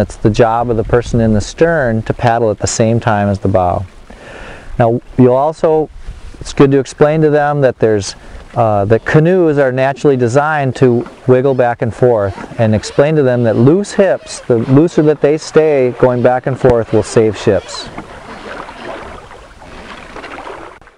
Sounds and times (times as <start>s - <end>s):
Speech: 0.0s - 3.9s, 4.8s - 17.9s
Rowboat, canoe, kayak: 0.0s - 20.9s.